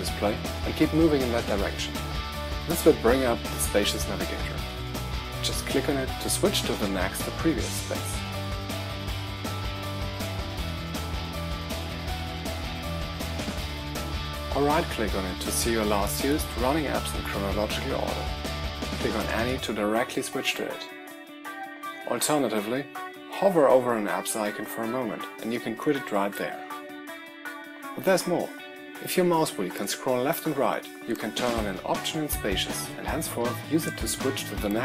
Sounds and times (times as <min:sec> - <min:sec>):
Speech: 0:00.0 - 0:02.0, 0:02.7 - 0:04.6, 0:05.4 - 0:08.2, 0:14.5 - 0:18.3, 0:19.0 - 0:20.9, 0:22.1 - 0:26.6, 0:28.0 - 0:34.8
Music: 0:00.0 - 0:34.8.